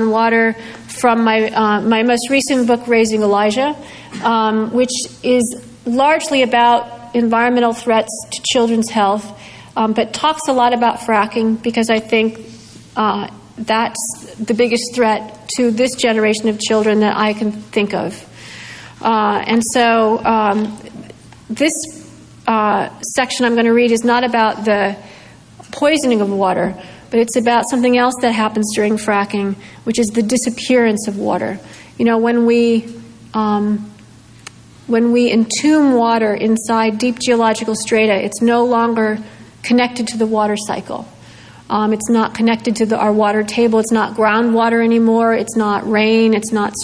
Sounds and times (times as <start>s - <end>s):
Female speech, woman speaking: 0.0s - 12.4s, 13.0s - 18.3s, 19.0s - 25.0s, 25.7s - 34.0s, 34.9s - 41.1s, 41.7s - 46.8s.